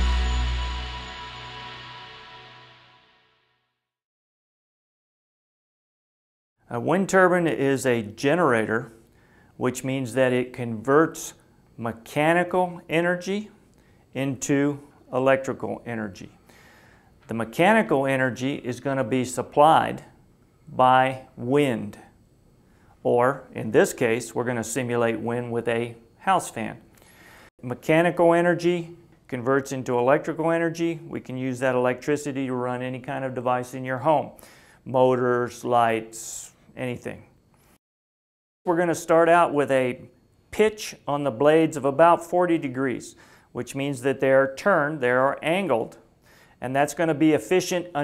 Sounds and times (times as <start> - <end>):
Speech: 6.7 - 9.0, 9.6 - 13.6, 14.2 - 16.4, 17.3 - 22.1, 23.0 - 26.8, 27.6 - 37.3, 38.7 - 46.0, 46.6 - 48.0.